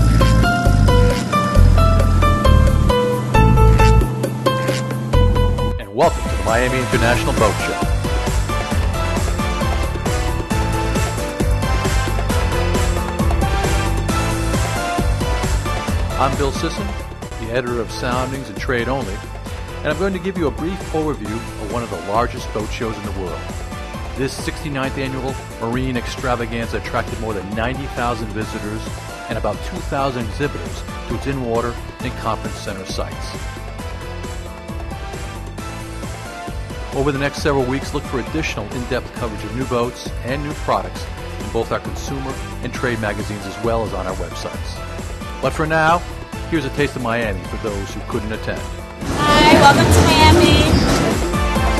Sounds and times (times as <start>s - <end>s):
Music: 0.0s - 51.8s
Speech: 5.8s - 7.8s, 16.2s - 19.2s, 19.8s - 23.4s, 24.2s - 33.4s, 37.0s - 44.8s, 45.4s - 50.8s.